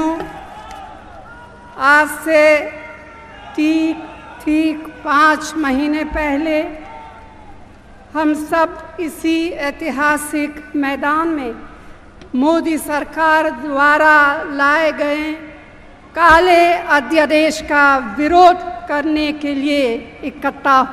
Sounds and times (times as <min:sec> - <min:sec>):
Female speech, woman speaking: 0:00.0 - 0:00.3, 0:01.8 - 0:02.8, 0:03.6 - 0:06.8, 0:08.2 - 0:11.6, 0:12.4 - 0:15.6, 0:16.2 - 0:20.9
Narration, monologue: 0:00.0 - 0:00.6, 0:01.8 - 0:06.9, 0:07.6 - 0:20.9.